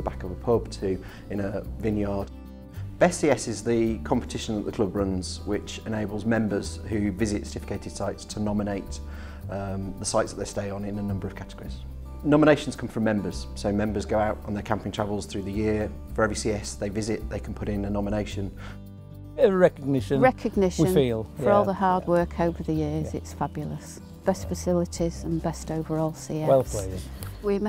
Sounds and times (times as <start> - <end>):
Music: 0.0 - 27.6
Speech: 3.0 - 9.0, 9.6 - 18.5, 19.4 - 27.6.